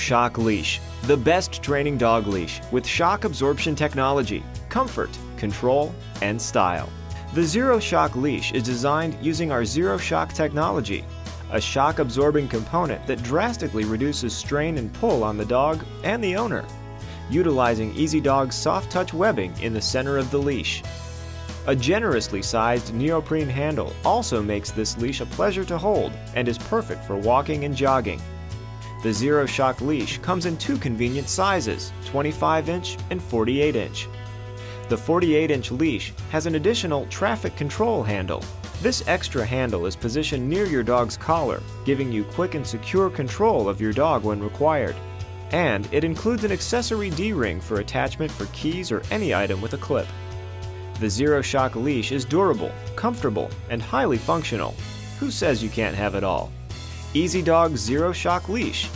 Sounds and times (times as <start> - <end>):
Speech: 0.0 - 16.7, 17.3 - 20.9, 21.6 - 28.2, 29.0 - 34.1, 34.9 - 50.1, 51.0 - 56.5, 57.2 - 58.9
Music: 0.0 - 58.9.